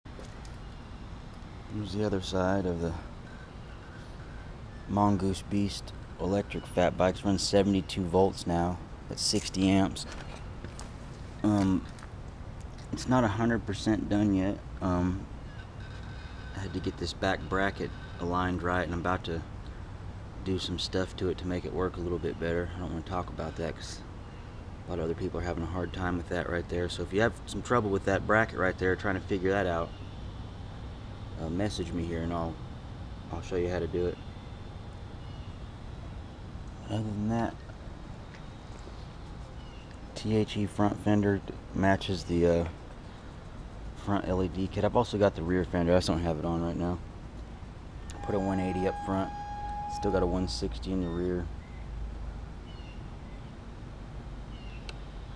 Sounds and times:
Speech: 0:01.7 - 0:03.1, 0:04.9 - 0:10.2, 0:11.4 - 0:11.9, 0:12.9 - 0:15.3, 0:16.6 - 0:19.5, 0:20.4 - 0:24.0, 0:24.9 - 0:29.9, 0:31.4 - 0:32.6, 0:33.3 - 0:34.2, 0:36.8 - 0:37.6, 0:40.2 - 0:42.8, 0:44.0 - 0:47.0, 0:48.1 - 0:49.3, 0:49.9 - 0:51.5.

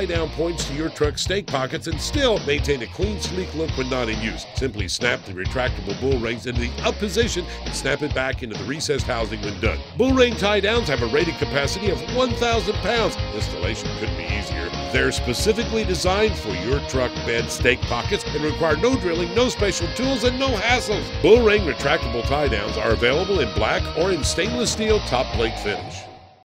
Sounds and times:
Speech: 0:00.0 - 0:26.1
Music: 0:00.0 - 0:26.4.

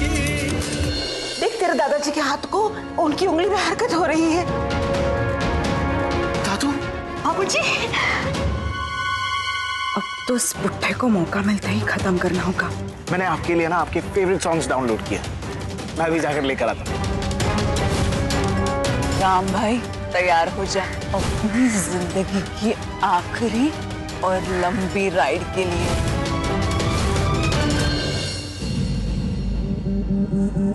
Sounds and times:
Scary music: 0:00.4 - 0:30.7.

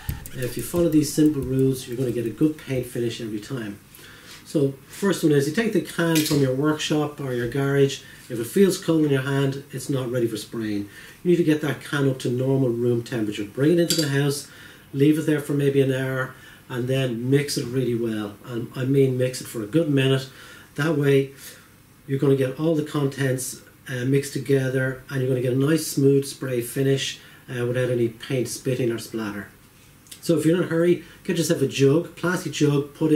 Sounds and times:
Speech: 0:00.0 - 0:03.8, 0:04.4 - 0:33.1.

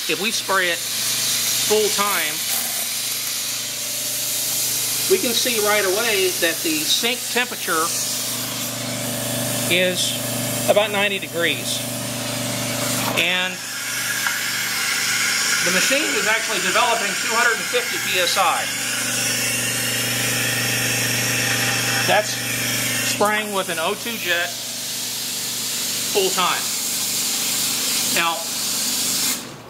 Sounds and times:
Speech: 0:00.0 - 0:00.8, 0:01.7 - 0:02.5, 0:05.1 - 0:08.0, 0:09.7 - 0:11.8, 0:13.2 - 0:13.6, 0:15.6 - 0:18.7, 0:22.0 - 0:22.4, 0:23.1 - 0:24.6, 0:26.1 - 0:26.7, 0:28.1 - 0:28.5
Pump (liquid): 0:00.0 - 0:29.5.

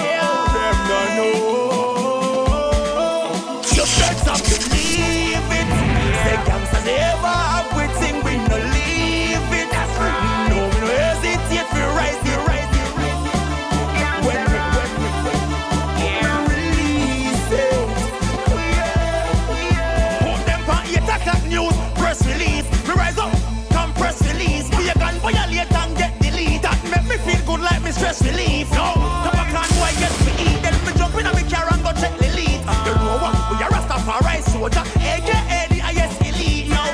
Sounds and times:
Music: 0:00.0 - 0:36.9.

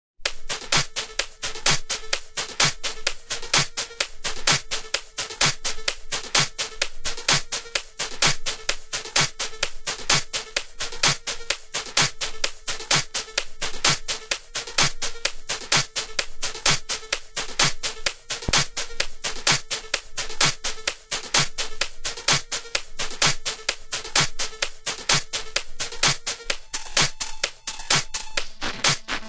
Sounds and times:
Drum machine: 0:00.2 - 0:29.2.

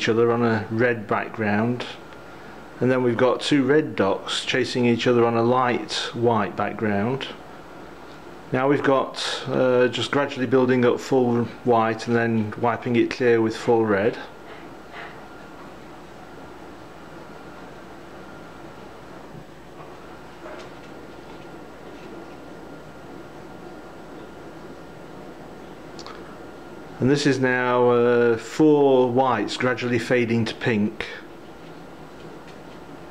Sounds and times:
Speech: 0:00.0 - 0:02.1, 0:02.8 - 0:07.4, 0:08.5 - 0:14.4, 0:27.0 - 0:31.3.

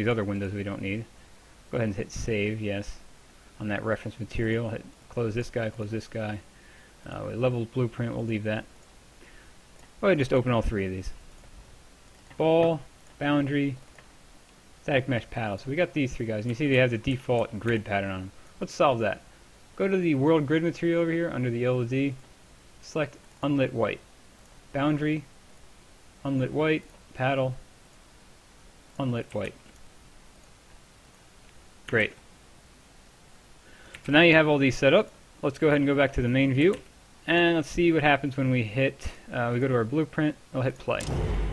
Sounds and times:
Speech: 0:00.0 - 0:01.1, 0:01.7 - 0:06.4, 0:07.0 - 0:08.7, 0:10.0 - 0:11.2, 0:12.4 - 0:13.8, 0:14.8 - 0:19.2, 0:19.8 - 0:22.2, 0:22.8 - 0:24.0, 0:24.7 - 0:25.3, 0:26.2 - 0:27.6, 0:29.0 - 0:29.6, 0:31.9 - 0:32.2, 0:34.1 - 0:41.2.

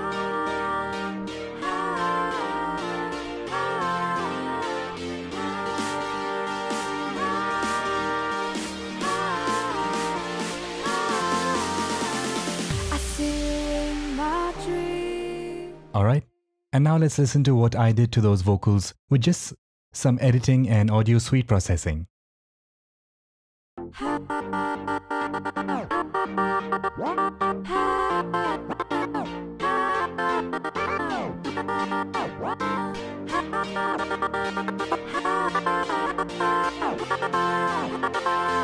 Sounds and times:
Music: 0:00.0 - 0:16.1, 0:23.8 - 0:38.6
Speech: 0:15.9 - 0:22.1.

